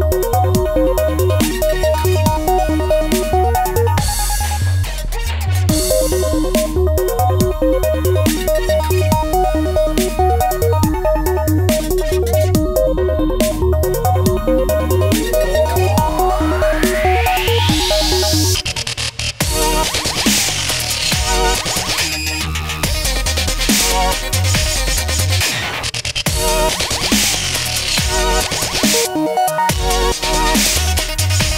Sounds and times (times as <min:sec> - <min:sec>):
Dubstep: 0:00.0 - 0:31.5.